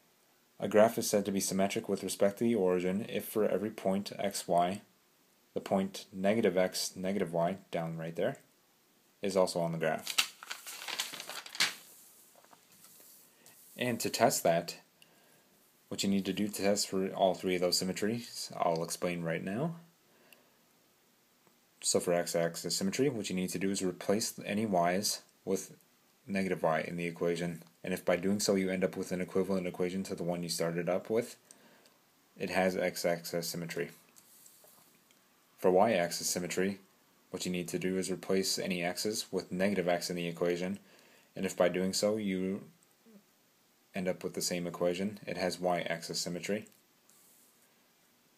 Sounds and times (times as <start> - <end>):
Speech: 0.6 - 4.9, 5.5 - 8.5, 9.2 - 10.1, 13.8 - 14.9, 15.9 - 19.9, 21.8 - 31.4, 32.4 - 34.0, 35.6 - 40.8, 41.4 - 43.2, 43.9 - 46.8.